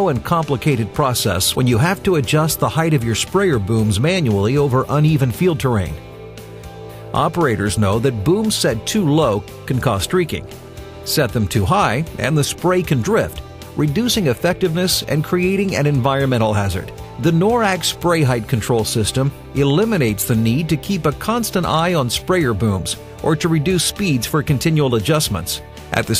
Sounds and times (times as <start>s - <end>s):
Speech: 0.0s - 6.0s, 7.1s - 10.5s, 11.1s - 26.1s
Music: 0.0s - 26.1s.